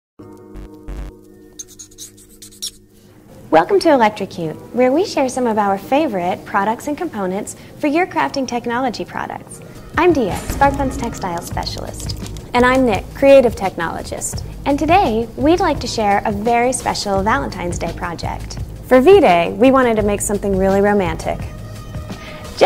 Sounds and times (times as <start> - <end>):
Music: 0.2 - 22.6
Speech: 3.5 - 21.5.